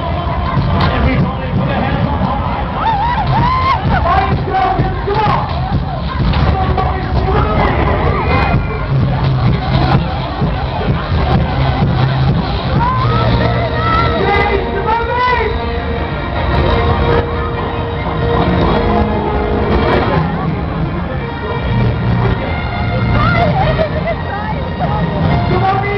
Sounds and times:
Music: 0:00.0 - 0:25.9.

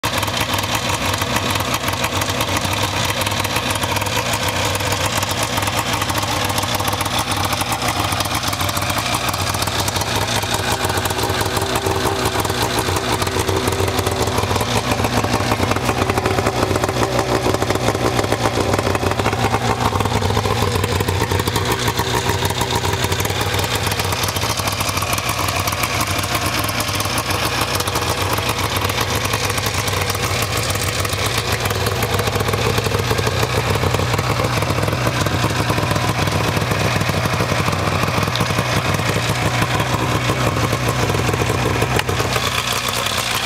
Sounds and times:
Vehicle: 0:00.0 - 0:43.4.

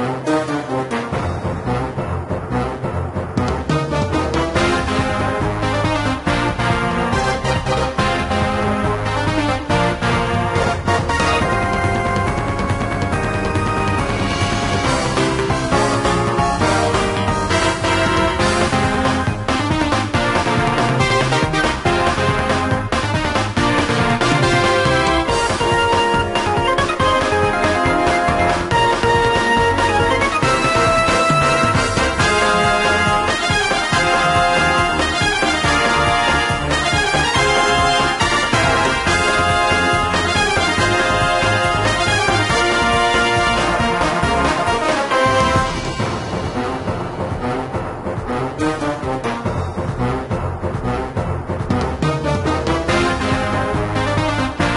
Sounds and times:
Music: 0:00.0 - 0:54.7.

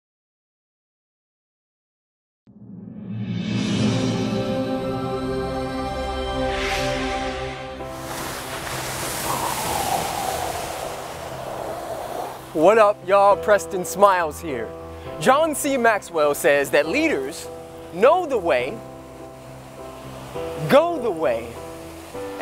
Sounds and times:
Music: 0:02.5 - 0:22.4
Outside, rural or natural: 0:02.6 - 0:22.4
Ocean: 0:07.8 - 0:22.4.

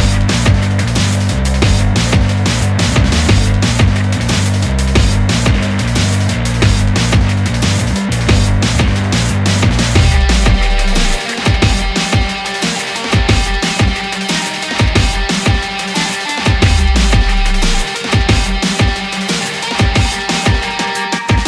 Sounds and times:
Music: 0:00.0 - 0:21.4.

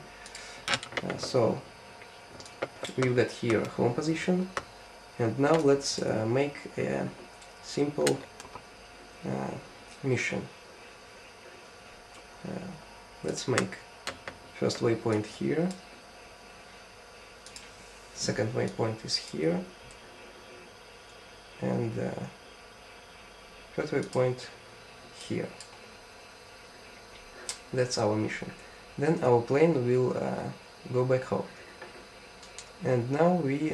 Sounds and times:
Speech: 0:01.0 - 0:01.7, 0:02.8 - 0:04.6, 0:05.2 - 0:08.3, 0:09.2 - 0:10.5, 0:12.4 - 0:13.9, 0:14.6 - 0:15.8, 0:18.2 - 0:19.8, 0:21.6 - 0:22.4, 0:23.7 - 0:24.6, 0:25.2 - 0:25.6, 0:27.7 - 0:31.6, 0:32.8 - 0:33.7.

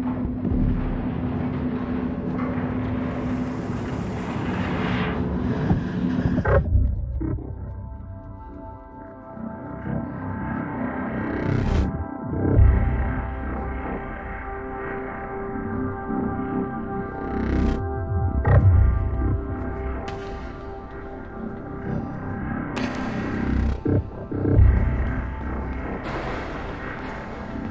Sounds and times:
Music: 0:00.0 - 0:27.7.

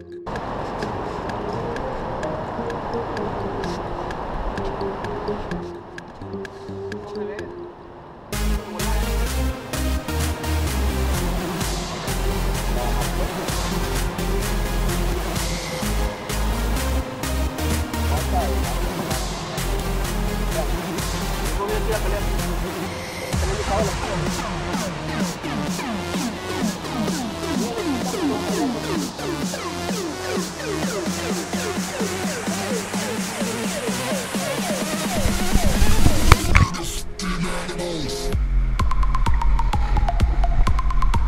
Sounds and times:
Music: 0:00.0 - 0:41.2
Speech: 0:07.0 - 0:07.5, 0:18.1 - 0:19.1, 0:21.6 - 0:22.4, 0:23.4 - 0:24.9.

